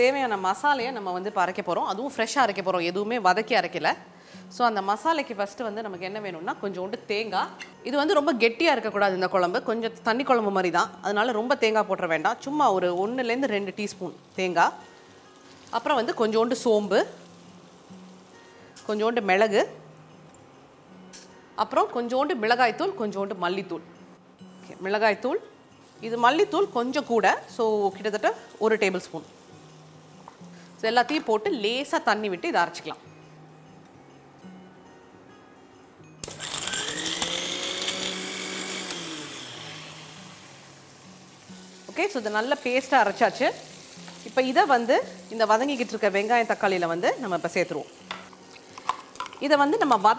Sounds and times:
Music: 0.0s - 50.1s.

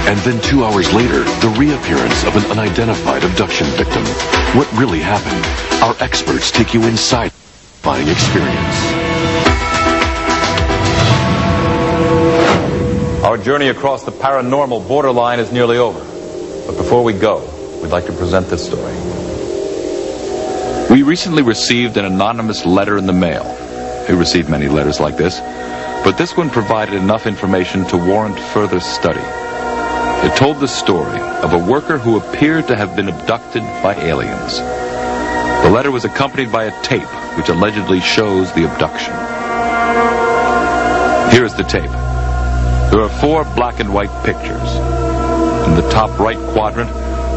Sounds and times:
Music: 0.0s - 47.3s
Speech: 0.1s - 8.9s, 13.2s - 16.1s, 16.7s - 19.0s, 20.9s - 23.5s, 24.1s - 25.4s, 26.0s - 29.2s, 30.2s - 34.6s, 35.6s - 39.2s, 41.3s - 42.0s, 42.9s - 44.8s, 45.7s - 47.0s.

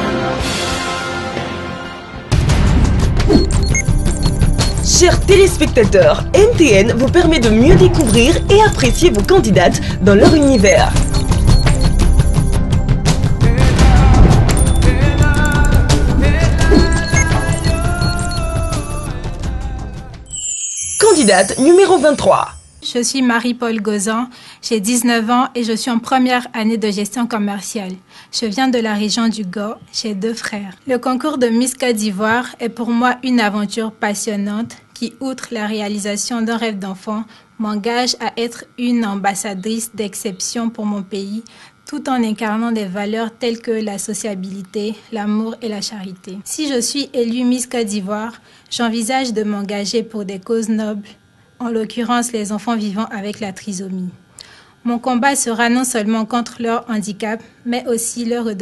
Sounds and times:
Speech: 4.9s - 11.0s, 21.0s - 54.2s, 54.9s - 58.6s.

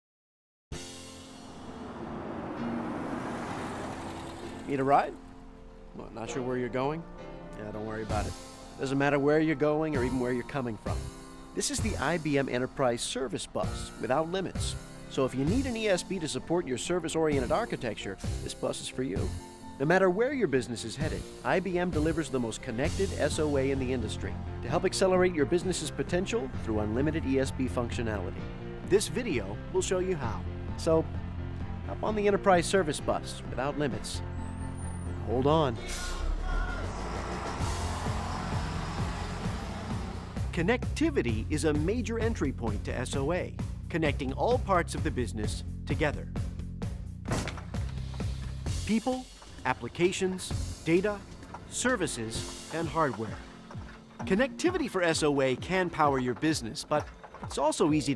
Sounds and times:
Music: 0.7s - 58.1s
Speech: 4.7s - 5.2s, 6.0s - 7.0s, 7.6s - 11.0s, 11.6s - 31.1s, 31.9s - 34.2s, 40.5s - 46.3s, 48.9s - 53.4s, 54.2s - 58.1s.

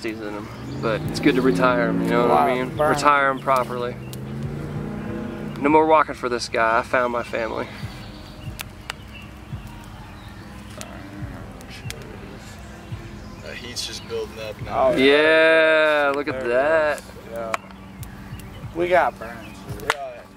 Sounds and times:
Fire: 0.0s - 20.3s.

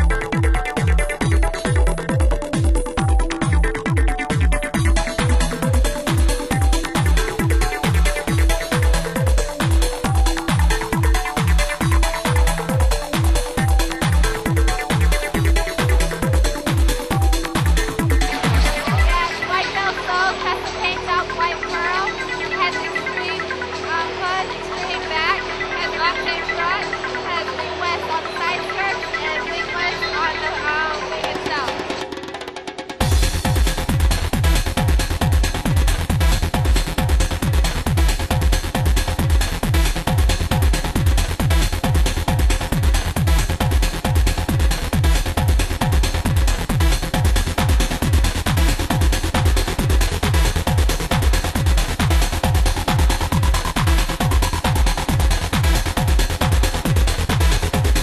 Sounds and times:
Music: 0.0s - 58.0s.

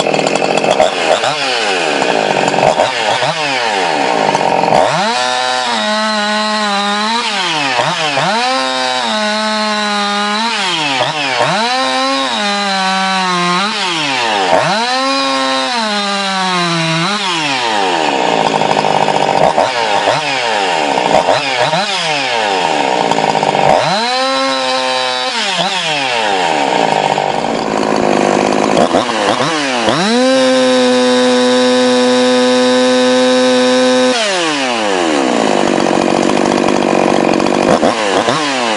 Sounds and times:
Chainsaw: 0.0s - 38.7s.

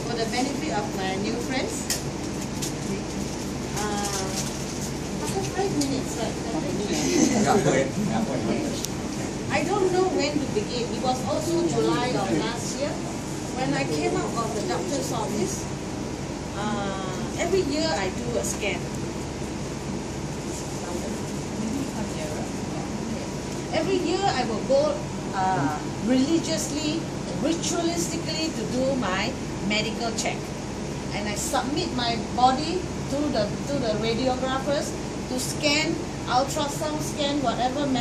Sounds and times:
Speech: 0.0s - 1.9s, 3.8s - 4.5s, 13.6s - 15.7s, 31.1s - 38.0s.

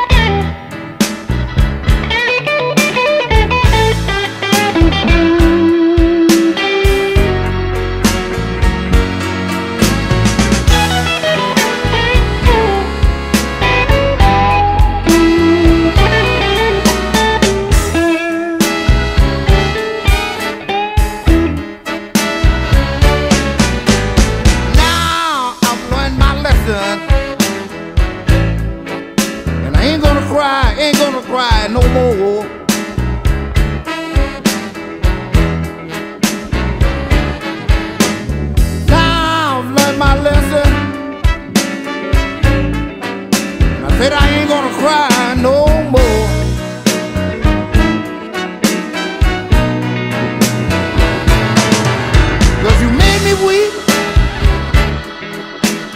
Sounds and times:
Steel guitar, slide guitar: 0.0s - 55.9s.

